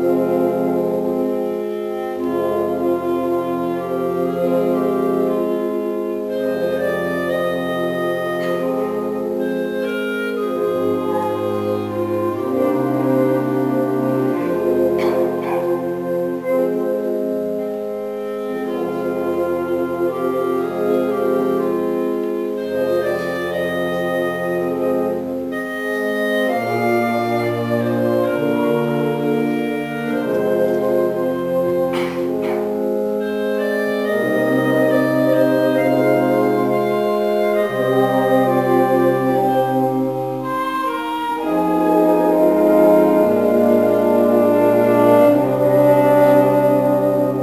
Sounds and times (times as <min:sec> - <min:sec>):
Music: 0:00.0 - 0:47.4.